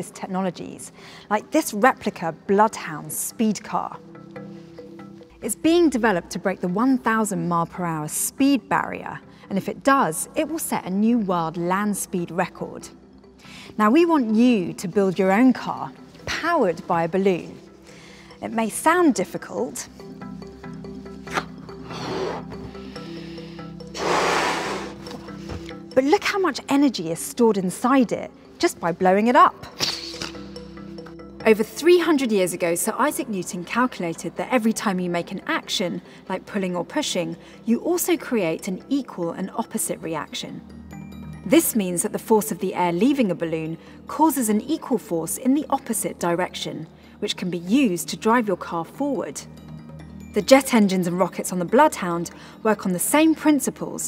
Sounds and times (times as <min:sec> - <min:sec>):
Speech: 0:00.0 - 0:04.0, 0:18.4 - 0:19.9, 0:26.0 - 0:29.6, 0:31.5 - 0:40.6, 0:41.5 - 0:49.4, 0:50.4 - 0:54.0
Music: 0:00.0 - 0:54.0.